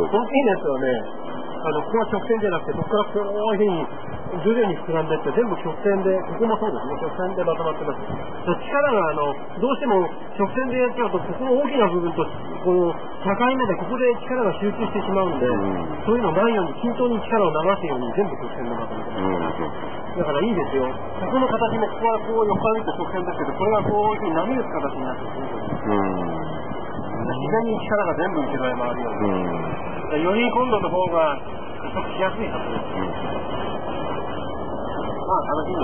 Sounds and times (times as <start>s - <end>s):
Speech: 0.0s - 26.6s, 27.2s - 33.3s, 35.2s - 35.8s.